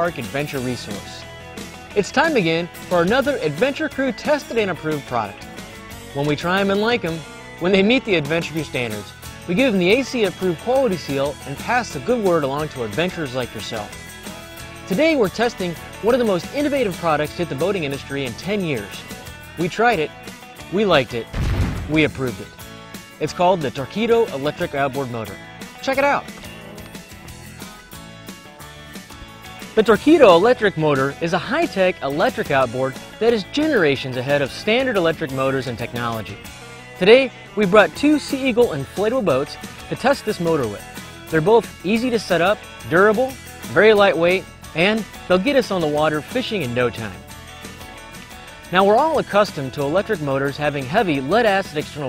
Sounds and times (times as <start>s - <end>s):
Speech: 0.0s - 1.2s, 2.0s - 5.4s, 6.2s - 14.0s, 14.9s - 19.0s, 19.6s - 20.1s, 20.7s - 22.5s, 23.2s - 26.3s, 29.8s - 36.4s, 37.0s - 47.2s, 48.7s - 52.0s
Music: 0.0s - 52.0s.